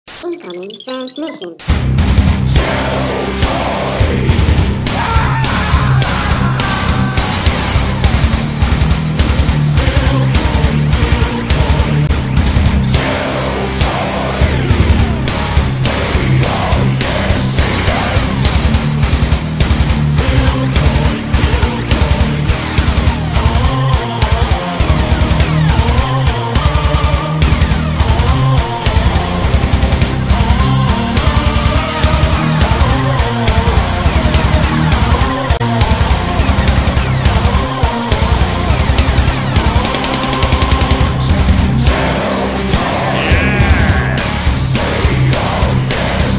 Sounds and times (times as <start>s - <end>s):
Music: 0.1s - 46.3s.